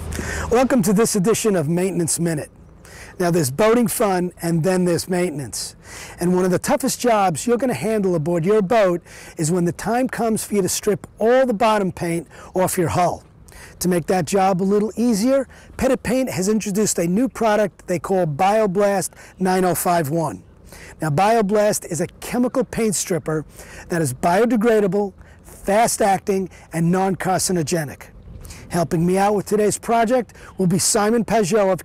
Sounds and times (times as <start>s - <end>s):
Speech: 0.5s - 2.5s, 3.2s - 28.1s, 28.7s - 31.8s.